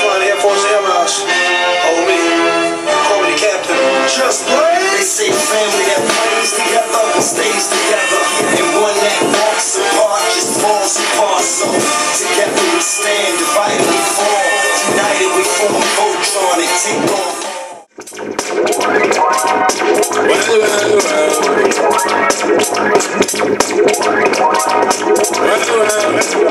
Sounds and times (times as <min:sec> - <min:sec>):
Music: 0:00.0 - 0:26.5.